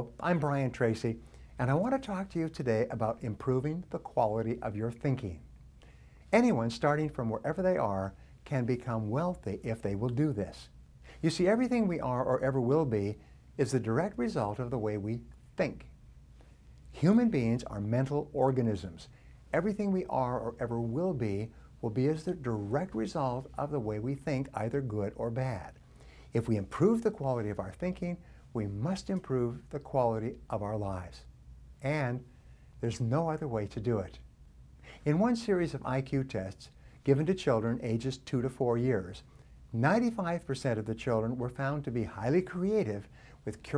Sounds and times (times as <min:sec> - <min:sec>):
Speech: 0:00.0 - 0:05.5, 0:06.3 - 0:15.9, 0:16.9 - 0:34.3, 0:35.0 - 0:43.7.